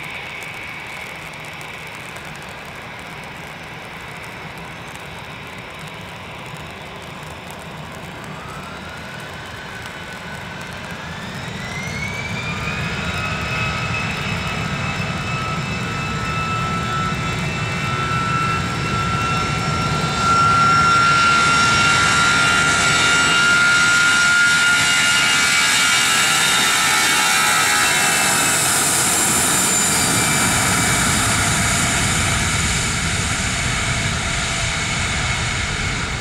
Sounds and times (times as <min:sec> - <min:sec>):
Fixed-wing aircraft, airplane: 0:00.0 - 0:36.2
Outside, urban or manmade: 0:00.0 - 0:36.2
Propeller, airscrew: 0:00.0 - 0:36.2.